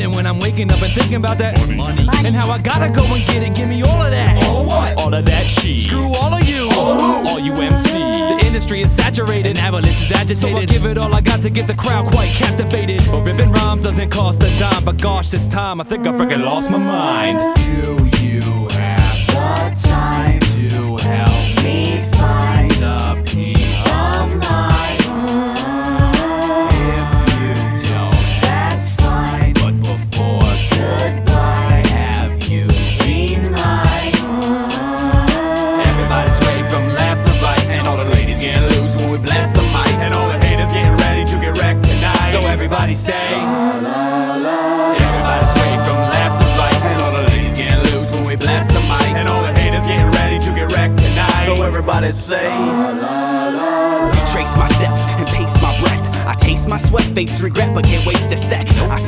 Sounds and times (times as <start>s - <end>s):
Music: 0.0s - 59.0s.